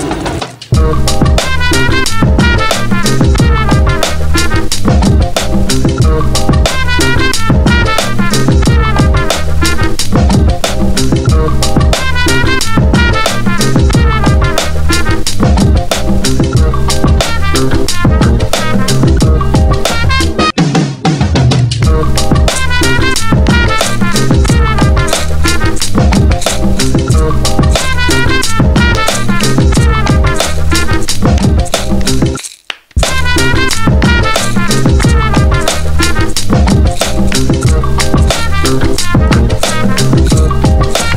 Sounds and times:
Background music: 0:00.0 - 0:32.4, 0:33.0 - 0:41.1
Funk: 0:00.0 - 0:32.4, 0:33.0 - 0:41.1.

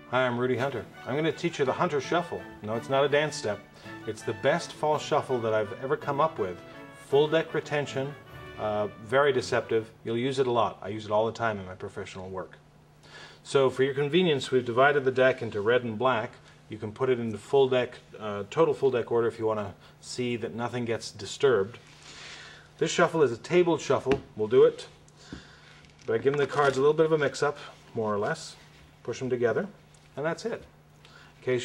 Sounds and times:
Speech: 0:00.1 - 0:12.6, 0:13.4 - 0:21.8, 0:22.8 - 0:25.0, 0:26.1 - 0:30.7, 0:31.4 - 0:31.6.

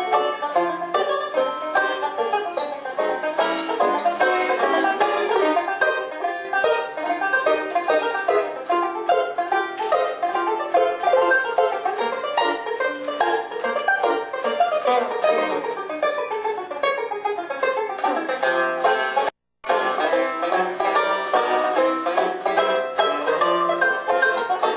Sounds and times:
Banjo: 0:00.0 - 0:24.7
Guitar: 0:00.0 - 0:24.7.

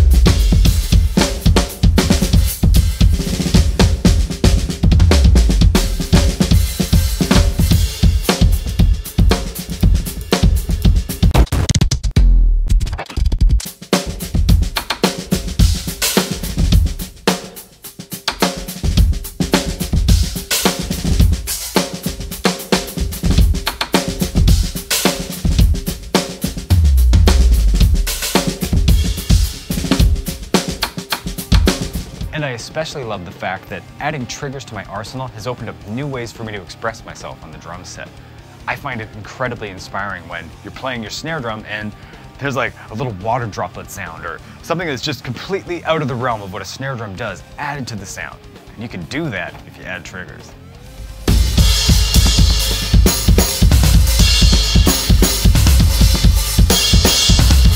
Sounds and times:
Bass drum: 0:00.0 - 0:17.5, 0:18.2 - 0:32.4, 0:50.8 - 0:57.7
Drum kit: 0:00.0 - 0:57.7.

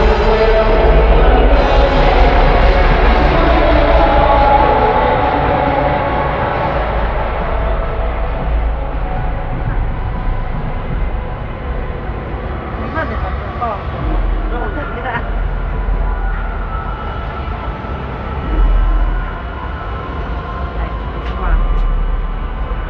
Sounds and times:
Speech: 0:12.8 - 0:15.8, 0:20.6 - 0:22.0.

